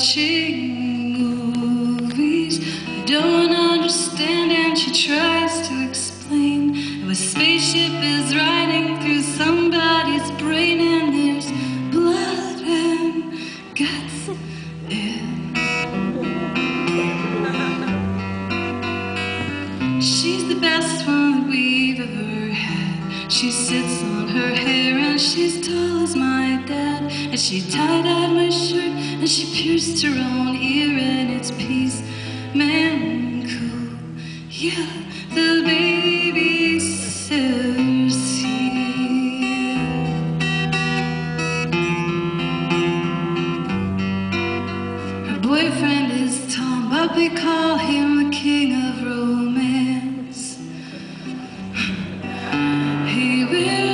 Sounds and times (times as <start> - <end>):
Female singing: 0.0 - 15.4, 20.0 - 39.9, 45.3 - 50.6, 53.0 - 53.9
Music: 0.0 - 53.9.